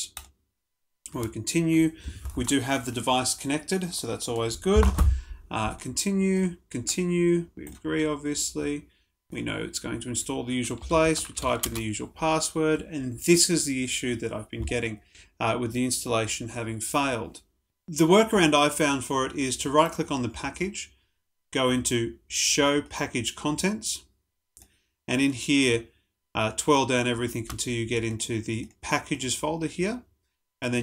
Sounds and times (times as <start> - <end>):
Speech: 1.1 - 24.1, 25.1 - 30.8.